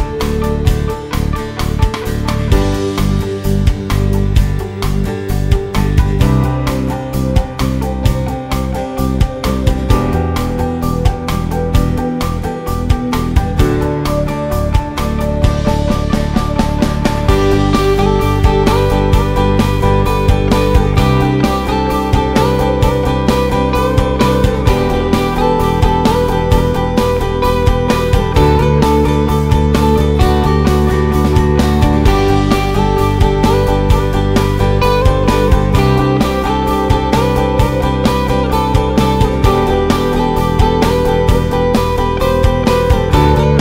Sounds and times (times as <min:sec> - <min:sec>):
Music: 0:00.0 - 0:43.6.